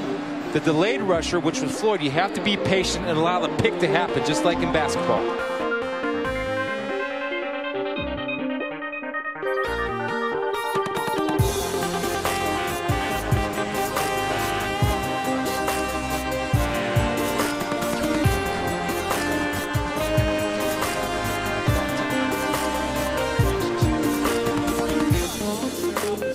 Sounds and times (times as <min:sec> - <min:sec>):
Music: 0:00.0 - 0:26.3.